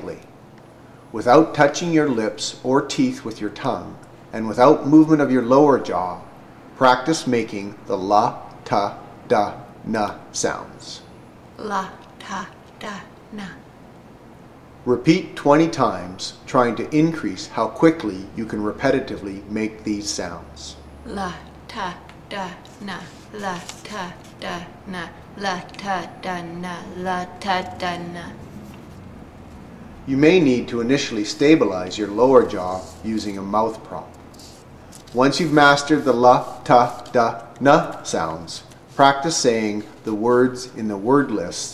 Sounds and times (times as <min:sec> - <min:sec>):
Speech: 0:01.2 - 0:06.2, 0:14.9 - 0:28.4, 0:30.1 - 0:34.2, 0:35.2 - 0:41.7.